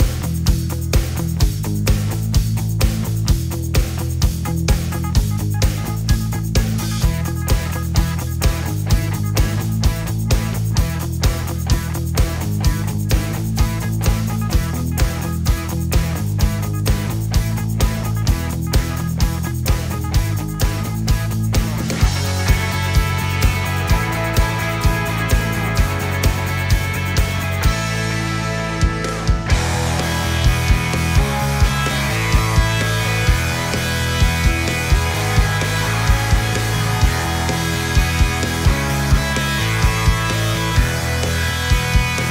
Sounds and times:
Music: 0:00.0 - 0:42.3.

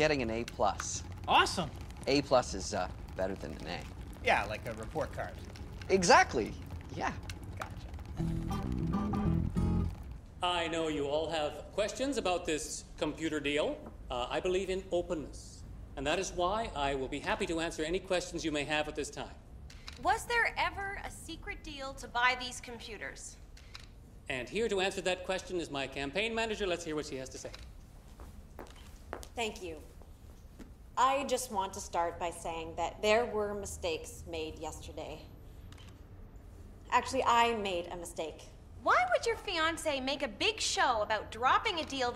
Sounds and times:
Female speech, woman speaking: 0:07.0 - 0:07.2, 0:20.0 - 0:23.4, 0:29.4 - 0:29.9, 0:31.0 - 0:35.3, 0:36.9 - 0:42.1.

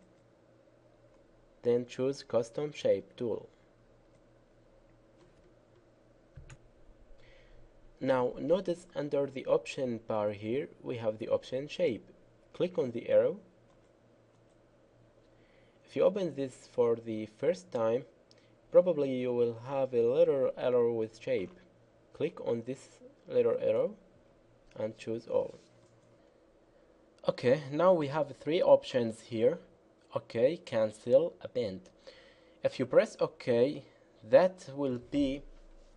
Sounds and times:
Speech: 0:01.6 - 0:03.6, 0:08.0 - 0:13.5, 0:15.9 - 0:18.1, 0:18.7 - 0:24.0, 0:24.8 - 0:25.7, 0:27.2 - 0:31.9, 0:32.6 - 0:35.6.

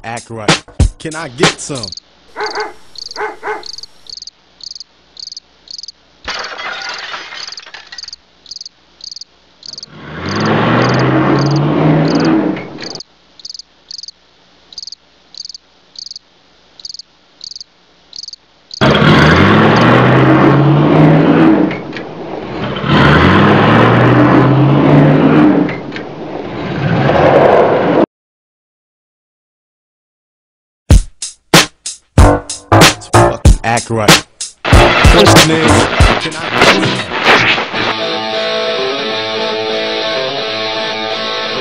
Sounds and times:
Outside, urban or manmade: 0:00.0 - 0:28.1, 0:30.9 - 0:41.6.

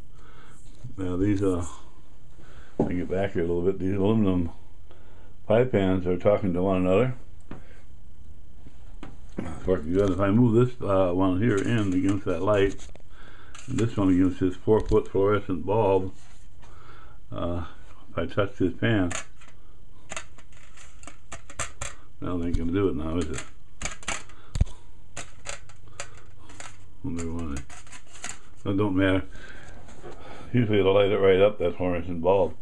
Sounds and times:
Inside, small room: 0:00.0 - 0:32.6
Speech: 0:00.9 - 0:01.9, 0:02.8 - 0:04.6, 0:05.5 - 0:07.2, 0:09.4 - 0:12.8, 0:13.7 - 0:16.2, 0:17.3 - 0:19.2, 0:22.2 - 0:23.5, 0:27.0 - 0:27.6, 0:28.6 - 0:29.3, 0:30.5 - 0:32.6.

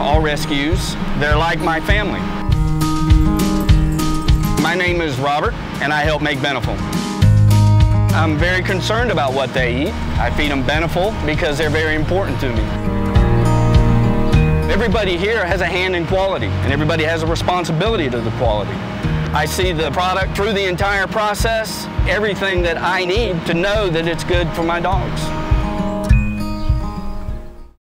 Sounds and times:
Speech: 0:00.0 - 0:02.3, 0:04.6 - 0:06.8, 0:08.1 - 0:12.7, 0:14.7 - 0:18.8, 0:19.4 - 0:25.3
Music: 0:00.0 - 0:27.8.

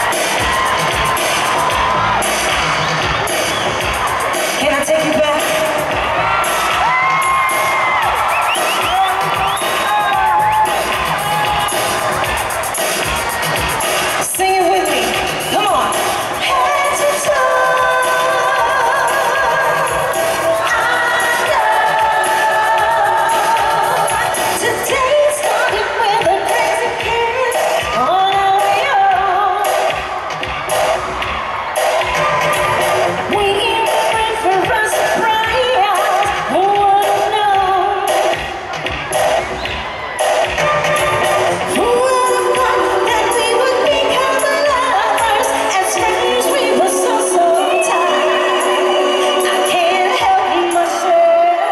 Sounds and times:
Music: 0:00.0 - 0:51.7.

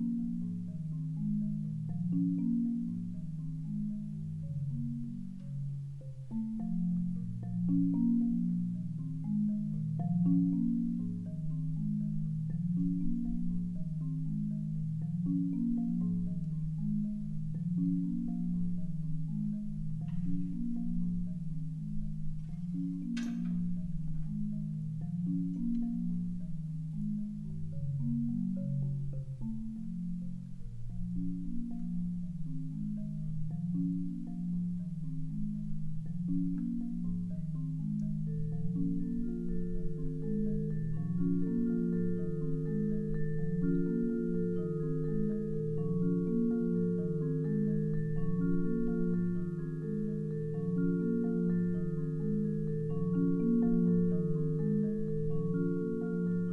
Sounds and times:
Vibraphone: 0:00.0 - 0:56.5.

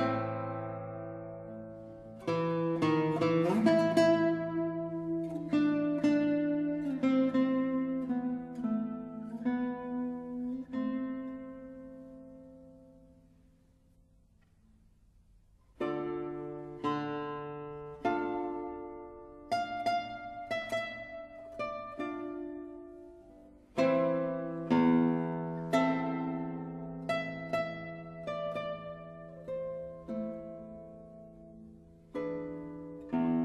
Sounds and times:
Music: 0:00.0 - 0:33.4.

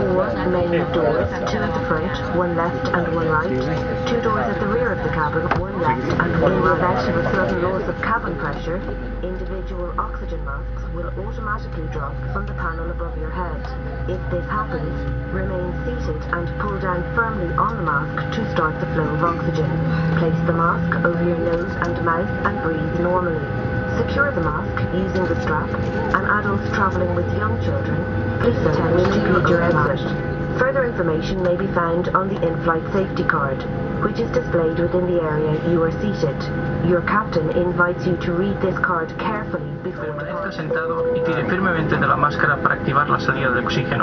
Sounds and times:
Speech: 0:00.0 - 0:44.0.

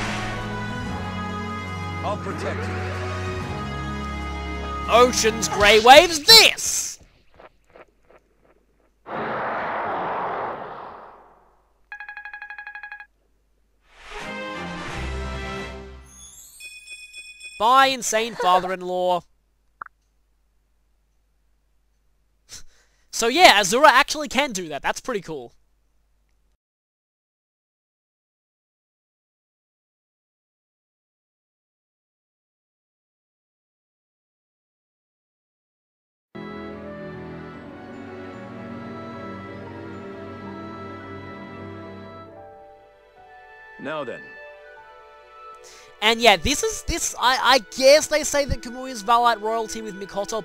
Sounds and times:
Music: 0:00.0 - 0:06.0, 0:14.1 - 0:17.7, 0:36.4 - 0:50.4
Speech: 0:04.9 - 0:07.0, 0:17.6 - 0:19.3, 0:23.1 - 0:25.6, 0:43.8 - 0:44.3, 0:46.0 - 0:50.4.

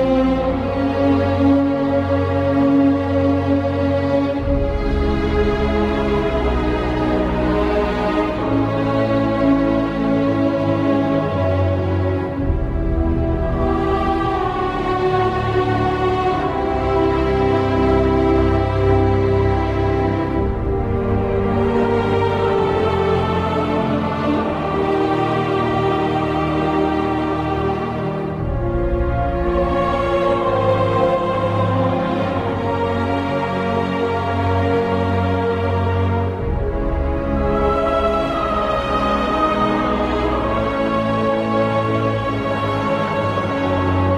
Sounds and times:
Video game music: 0:00.0 - 0:43.0
Background music: 0:00.0 - 0:44.1
Theme music: 0:00.0 - 0:44.1.

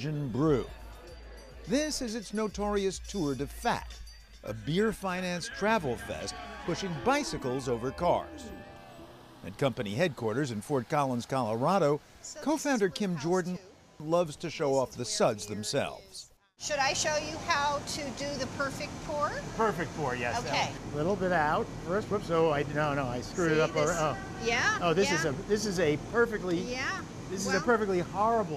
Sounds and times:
Music: 0:00.0 - 0:09.2.

